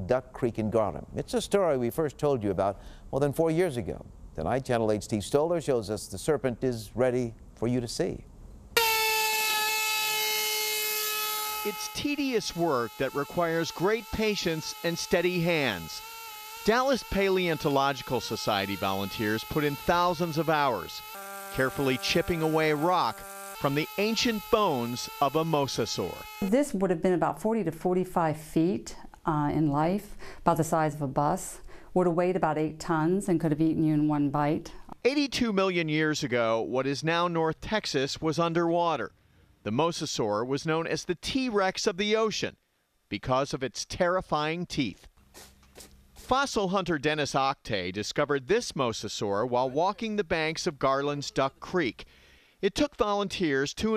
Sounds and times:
Speech: 0:00.0 - 0:08.2, 0:11.7 - 0:16.0, 0:16.7 - 0:21.0, 0:21.6 - 0:39.1, 0:39.7 - 0:45.1, 0:46.3 - 0:52.0, 0:52.6 - 0:53.9.

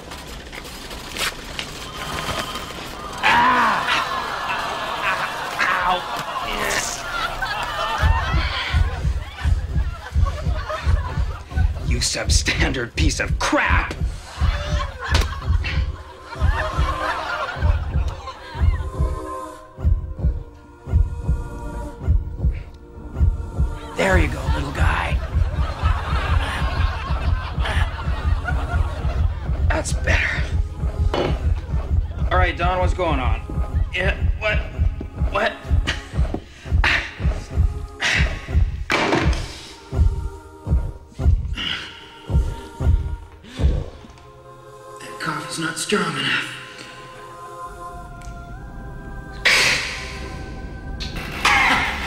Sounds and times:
Music: 0:00.1 - 0:52.0.

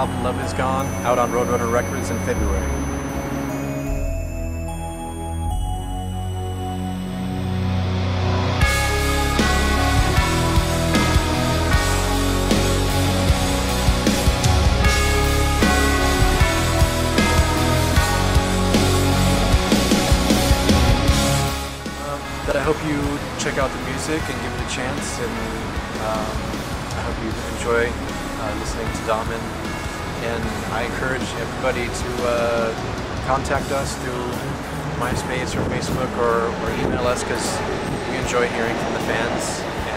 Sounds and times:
Speech: 0:00.0 - 0:02.8, 0:22.0 - 0:26.4, 0:27.0 - 0:29.5, 0:30.2 - 0:39.9
Music: 0:00.0 - 0:39.9.

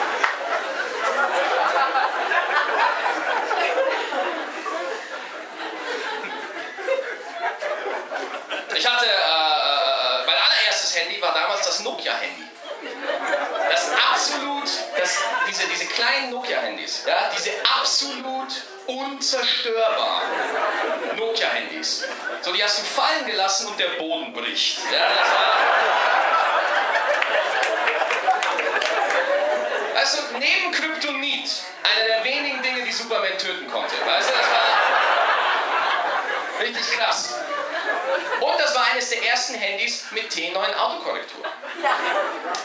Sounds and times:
Speech: 0:08.7 - 0:12.6, 0:13.7 - 0:25.8, 0:29.9 - 0:34.9, 0:36.6 - 0:42.0.

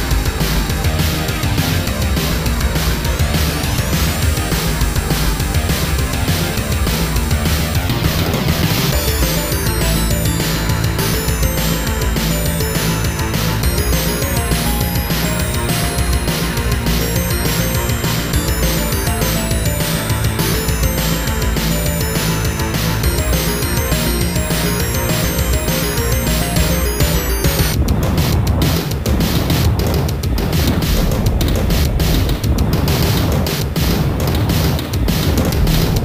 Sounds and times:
Dance music: 0:00.0 - 0:27.8.

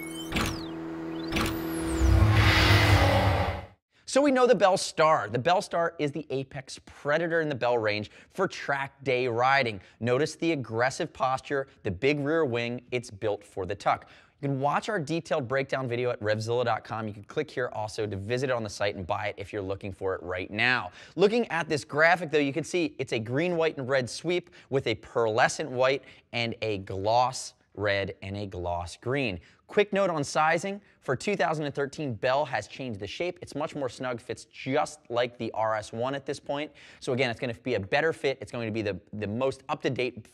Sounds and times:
Speech: 0:04.1 - 0:40.3.

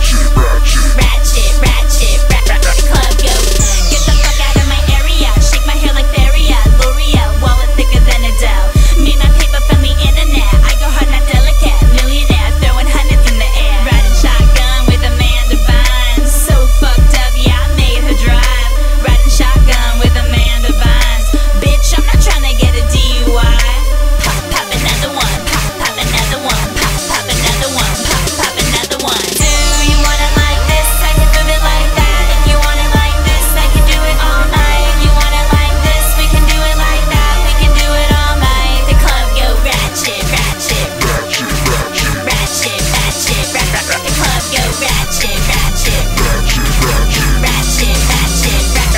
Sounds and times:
Music: 0:00.0 - 0:48.9.

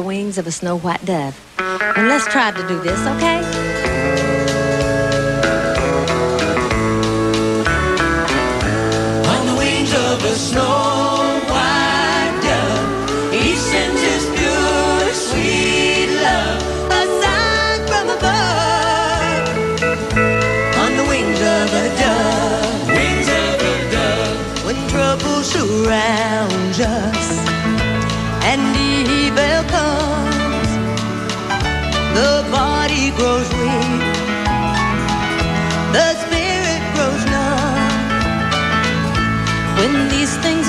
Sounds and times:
Music: 0:01.5 - 0:40.6.

